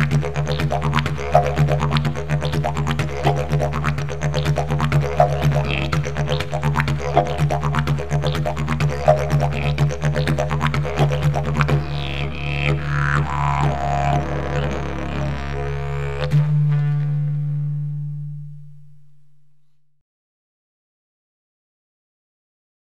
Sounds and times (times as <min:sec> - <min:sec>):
Didgeridoo: 0:00.0 - 0:19.2.